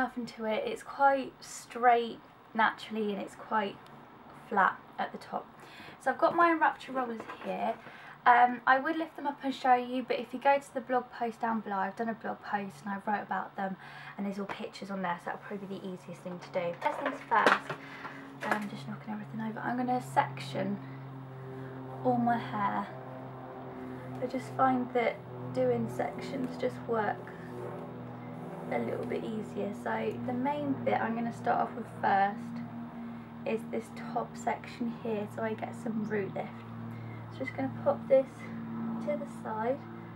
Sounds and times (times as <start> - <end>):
Speech: 0.0 - 3.8, 4.4 - 17.8, 18.4 - 20.8, 22.0 - 23.0, 24.2 - 27.3, 28.7 - 32.6, 33.5 - 36.6, 37.3 - 39.8
Inside, small room: 0.0 - 40.1.